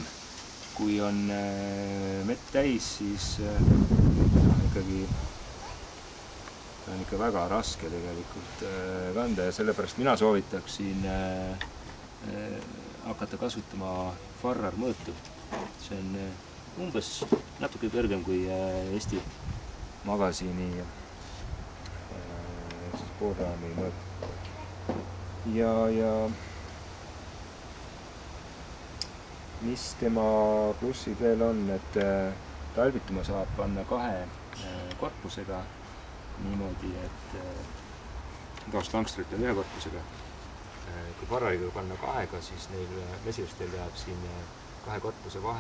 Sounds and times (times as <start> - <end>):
Speech: 0.8 - 3.7, 6.9 - 11.6, 12.2 - 15.2, 15.8 - 19.3, 20.1 - 20.9, 22.1 - 24.8, 25.4 - 26.4, 29.6 - 35.7, 36.4 - 37.7, 38.6 - 40.1, 40.8 - 45.6.